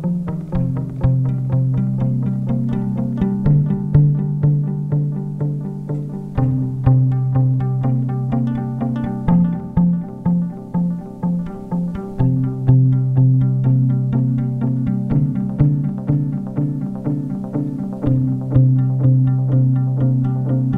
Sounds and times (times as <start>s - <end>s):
Music: 0.0s - 20.7s.